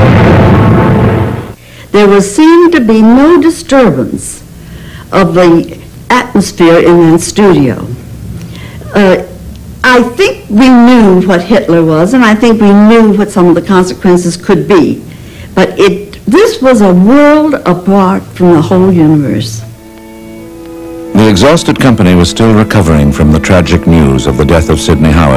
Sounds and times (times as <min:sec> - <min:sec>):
Speech: 0:02.0 - 0:04.4, 0:08.8 - 0:15.0, 0:15.6 - 0:19.6, 0:21.2 - 0:25.3
Music: 0:18.4 - 0:25.3.